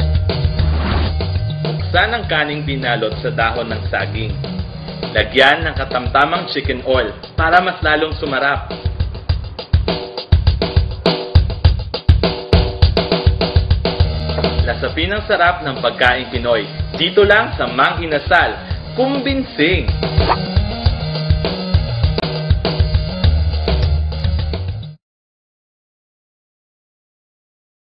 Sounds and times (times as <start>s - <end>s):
Music: 0.0s - 25.0s
Speech: 1.9s - 4.4s, 5.2s - 8.8s, 14.6s - 20.0s.